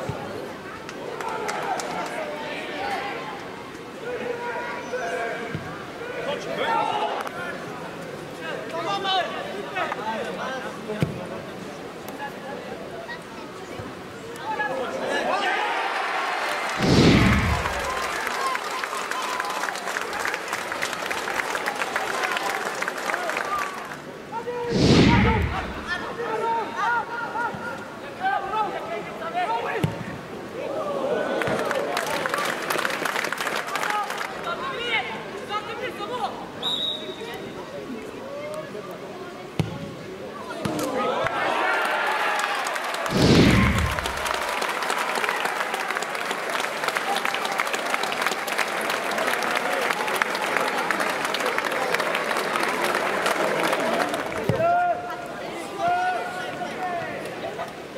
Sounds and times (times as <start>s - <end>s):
Speech: 0.0s - 15.8s, 22.0s - 32.6s, 33.7s - 42.0s, 49.0s - 57.9s.